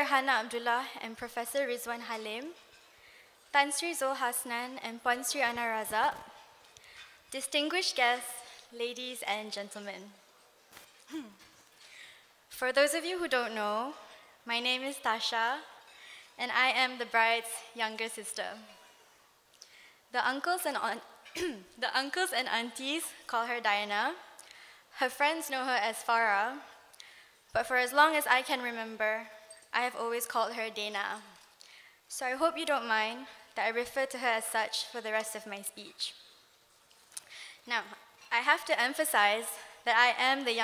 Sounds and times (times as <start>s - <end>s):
Female speech, woman speaking: 0.0s - 2.6s, 3.6s - 6.3s, 7.3s - 10.2s, 12.6s - 15.7s, 16.4s - 18.7s, 20.2s - 24.2s, 25.0s - 26.7s, 27.6s - 31.2s, 32.1s - 36.2s, 37.7s - 40.6s
Narration, monologue: 0.0s - 40.6s.